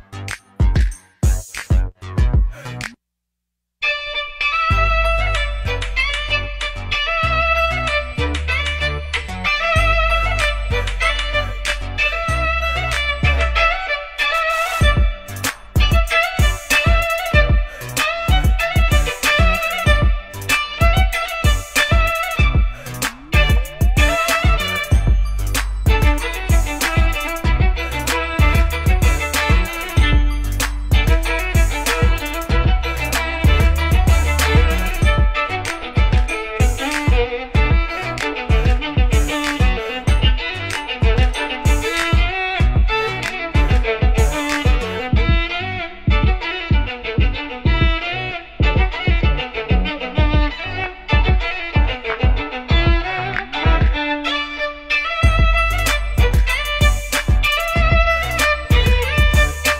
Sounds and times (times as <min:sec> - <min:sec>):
Violin, fiddle: 0:03.8 - 0:59.7.